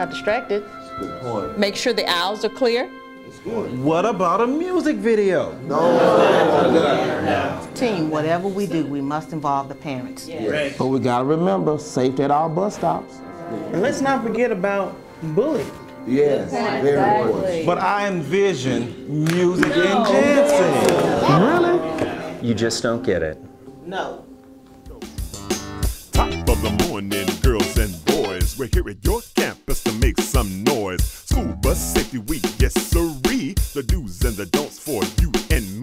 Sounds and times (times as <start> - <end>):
Music: 0.0 - 35.8.